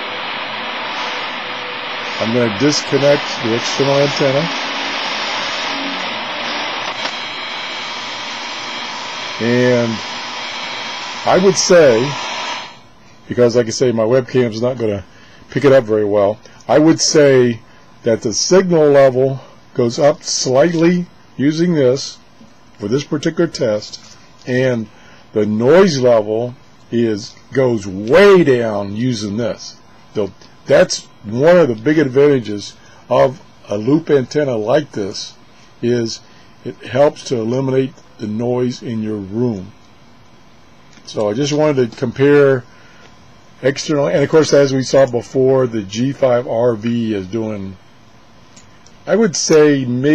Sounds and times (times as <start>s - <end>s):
Radio: 0.0s - 12.8s, 41.1s - 42.6s, 43.7s - 47.8s.